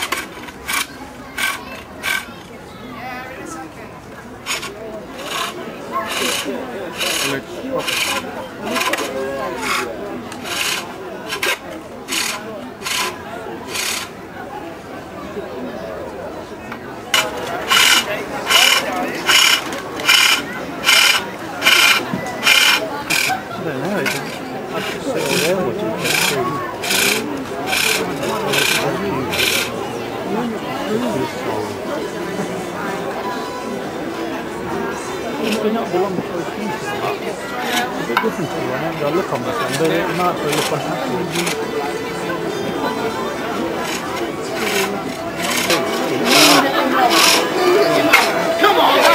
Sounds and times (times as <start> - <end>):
Speech: 0.0 - 49.1.